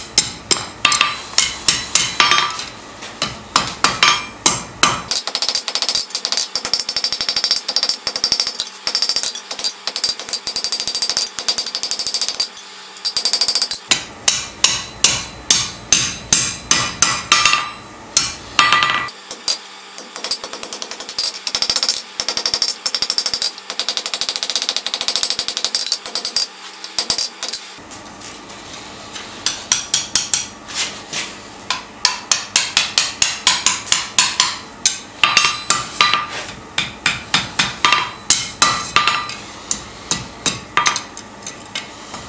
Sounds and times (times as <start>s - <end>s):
Tools: 4.9s - 14.0s, 15.0s - 27.8s.